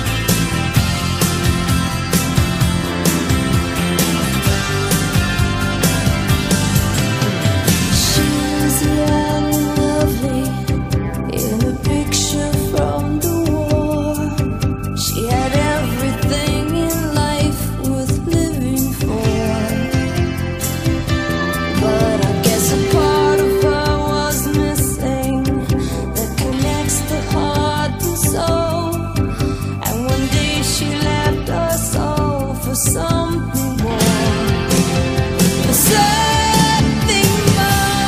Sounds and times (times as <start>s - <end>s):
Music: 0.0s - 38.0s.